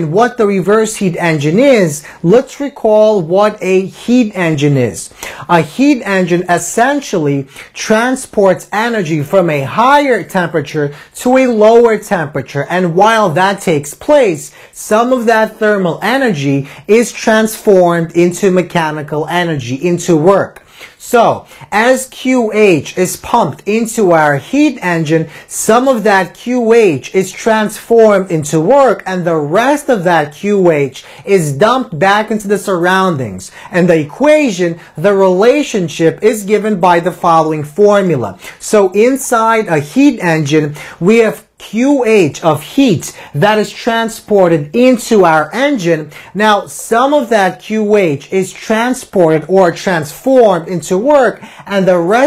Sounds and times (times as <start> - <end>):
Speech: 0.0 - 52.2.